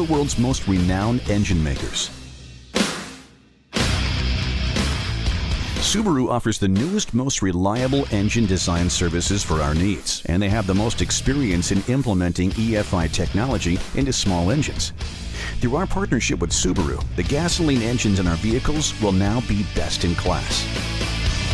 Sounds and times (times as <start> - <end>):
Speech: 0.0 - 2.2, 5.8 - 20.7
Music: 0.0 - 21.5.